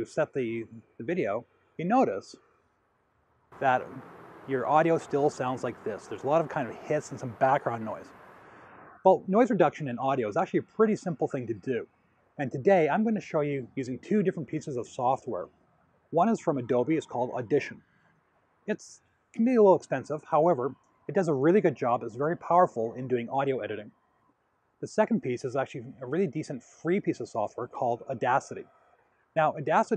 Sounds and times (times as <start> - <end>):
Speech: 0.0 - 2.4, 3.6 - 8.1, 9.1 - 11.8, 12.4 - 15.5, 16.2 - 17.8, 18.7 - 23.9, 24.8 - 28.6, 29.4 - 29.9.